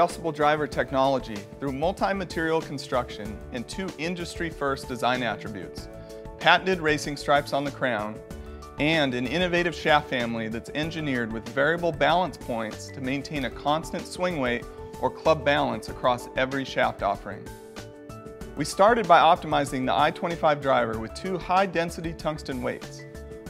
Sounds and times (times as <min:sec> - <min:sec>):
Speech: 0:00.0 - 0:08.2, 0:08.8 - 0:17.5, 0:18.6 - 0:23.0
Music: 0:00.0 - 0:23.4.